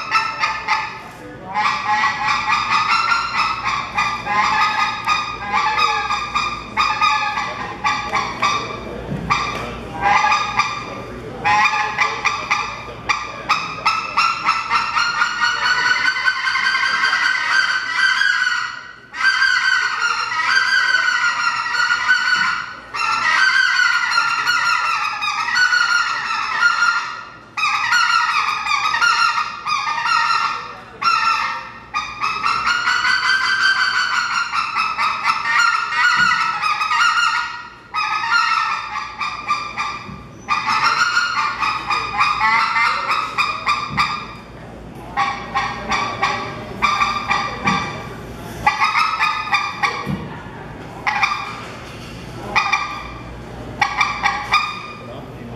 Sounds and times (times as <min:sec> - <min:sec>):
Honk: 0:00.0 - 0:44.5, 0:45.2 - 0:50.3, 0:51.0 - 0:51.8, 0:52.5 - 0:53.2, 0:53.8 - 0:55.2
Speech: 0:00.0 - 0:55.5.